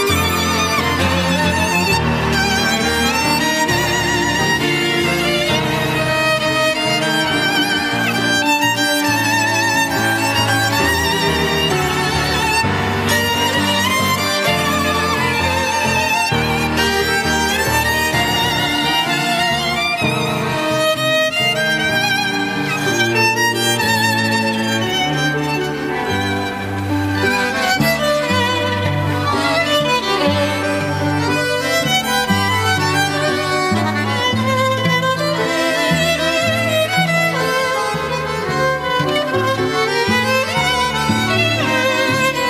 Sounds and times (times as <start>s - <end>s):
Violin, fiddle: 0.0s - 42.4s.